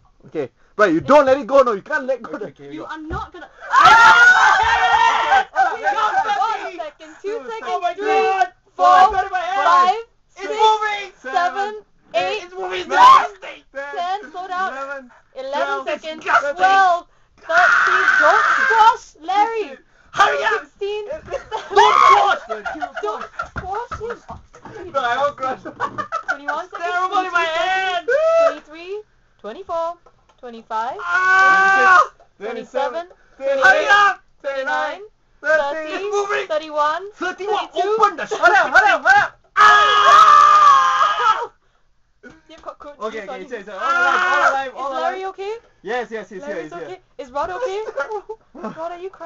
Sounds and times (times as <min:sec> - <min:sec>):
Inside, small room: 0:00.0 - 0:49.2.